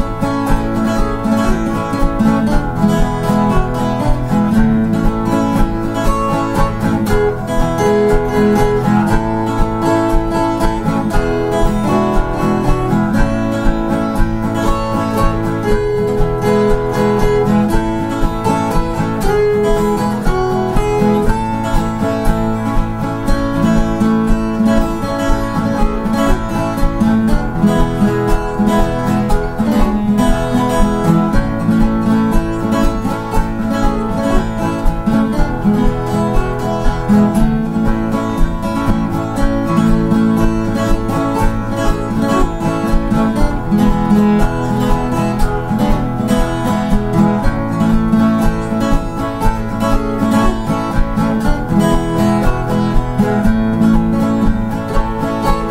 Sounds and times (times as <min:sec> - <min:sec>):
Music: 0:00.0 - 0:55.7.